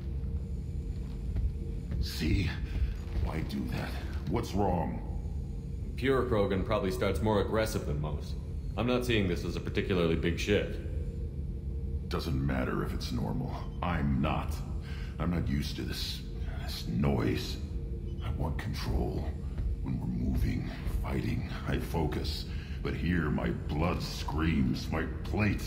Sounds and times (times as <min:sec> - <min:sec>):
Speech: 0:02.0 - 0:05.2, 0:06.0 - 0:10.9, 0:12.1 - 0:25.6.